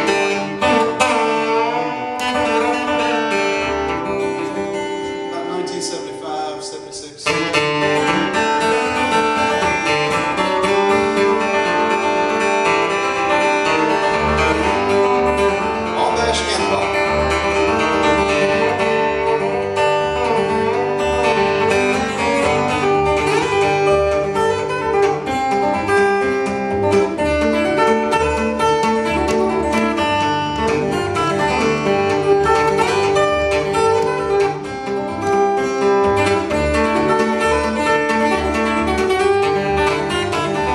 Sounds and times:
Flamenco: 0.0s - 5.8s, 7.3s - 40.7s
Guitar: 0.0s - 40.7s.

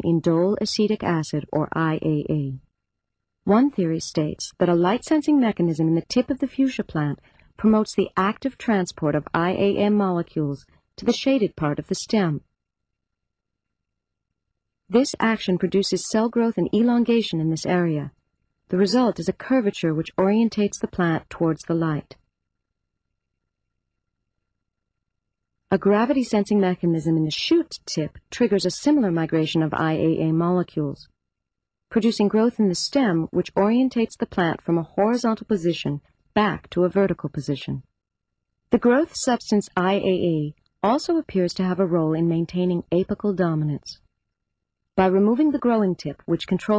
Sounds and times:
Speech: 0.0s - 2.7s, 3.5s - 12.4s, 14.9s - 22.2s, 25.7s - 31.1s, 31.9s - 37.9s, 38.8s - 44.0s, 45.0s - 46.7s.

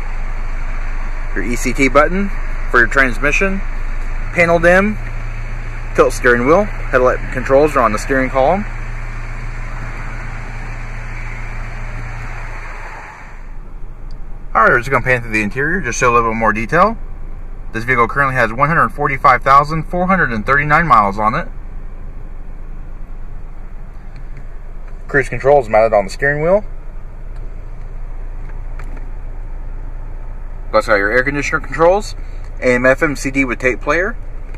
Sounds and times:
Car: 0.0s - 34.5s.

